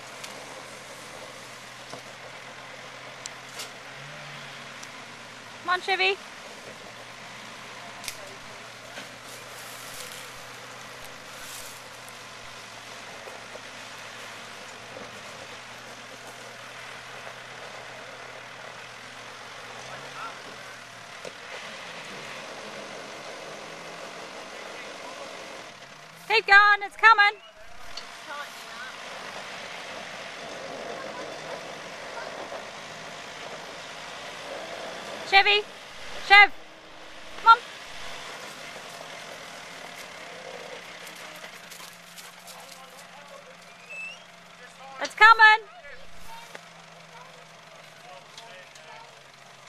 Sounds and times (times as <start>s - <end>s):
Car: 0.0s - 49.6s
Outside, rural or natural: 0.0s - 49.6s.